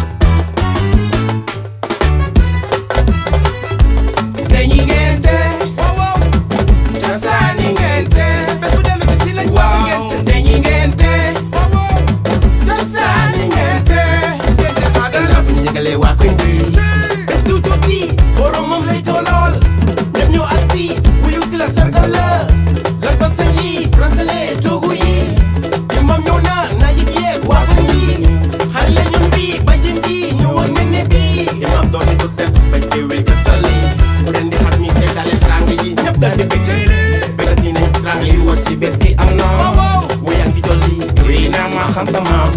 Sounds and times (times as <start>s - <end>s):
Music: 0.0s - 42.5s.